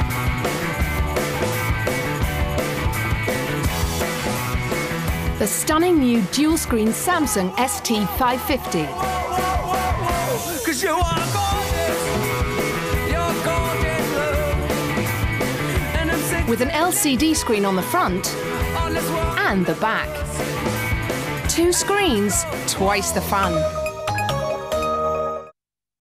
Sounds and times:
Music: 0.0s - 25.6s
Speech: 5.4s - 9.0s, 16.5s - 18.4s, 19.4s - 20.2s, 21.5s - 23.7s.

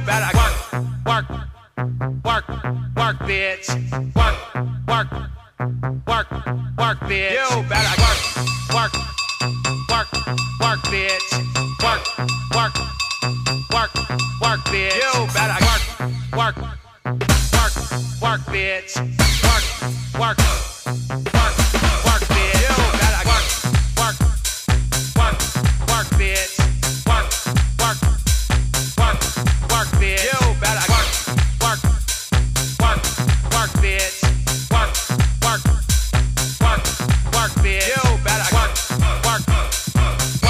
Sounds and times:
Music: 0.0s - 2.1s, 7.6s - 40.4s.

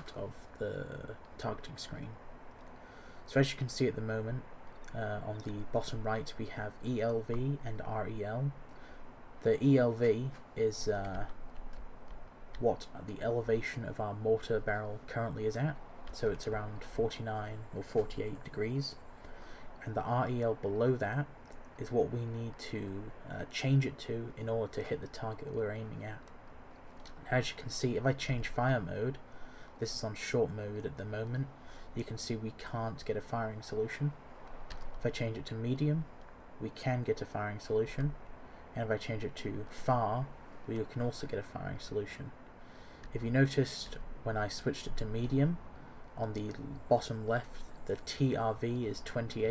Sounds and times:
Speech: 0.0s - 2.2s, 3.3s - 8.6s, 9.4s - 11.4s, 12.6s - 19.0s, 19.8s - 26.3s, 27.1s - 29.2s, 29.8s - 34.2s, 35.0s - 38.2s, 38.8s - 42.4s, 43.1s - 49.5s
Outside, rural or natural: 0.0s - 49.5s.

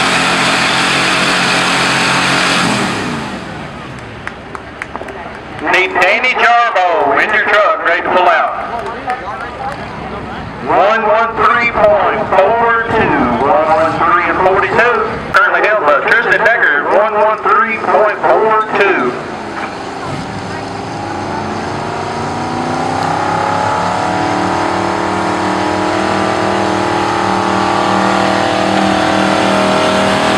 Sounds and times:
Truck: 0.0s - 30.3s
Speech: 5.0s - 19.2s.

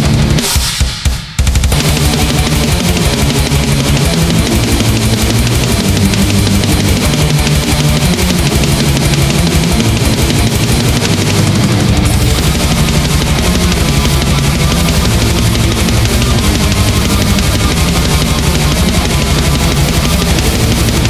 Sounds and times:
Dubstep: 0.0s - 21.0s.

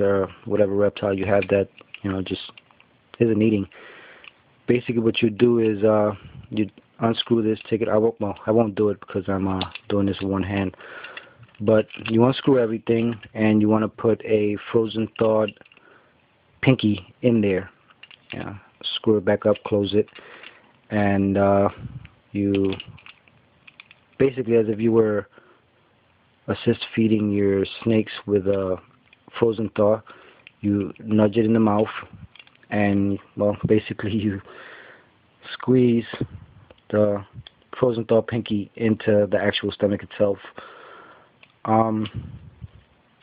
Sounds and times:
Speech: 0.0s - 2.6s, 3.2s - 3.7s, 4.7s - 10.8s, 11.6s - 15.6s, 16.6s - 20.1s, 20.9s - 23.0s, 24.2s - 25.3s, 26.5s - 34.5s, 35.4s - 40.6s, 41.6s - 42.5s
Inside, small room: 0.0s - 43.2s.

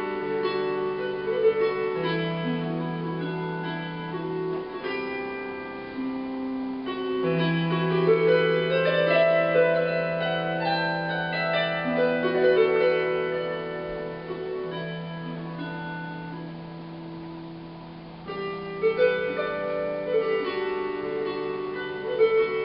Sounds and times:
Harp: 0.0s - 22.6s
Pizzicato: 0.0s - 22.6s.

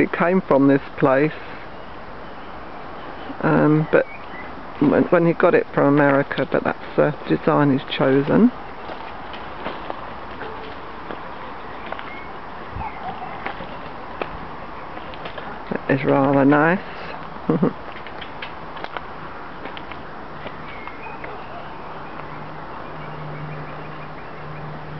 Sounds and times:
Speech: 0.0s - 1.4s, 3.4s - 4.1s, 4.8s - 8.6s, 15.7s - 17.0s.

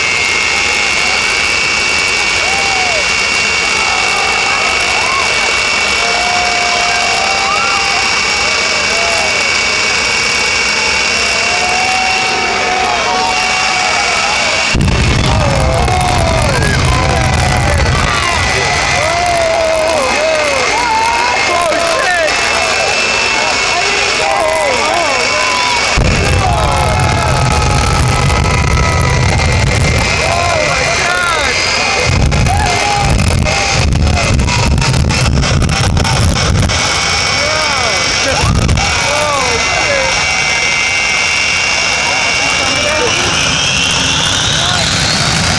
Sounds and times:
Truck: 0.0s - 45.5s.

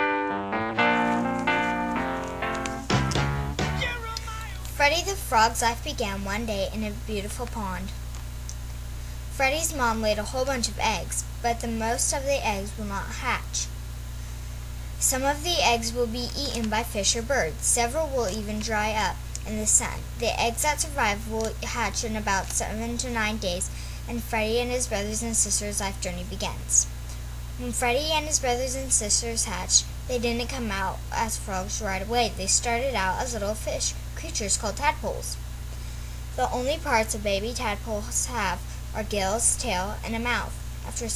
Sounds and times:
Speech: 3.8s - 8.0s, 9.4s - 13.7s, 15.0s - 26.9s, 27.6s - 35.4s, 36.4s - 41.1s.

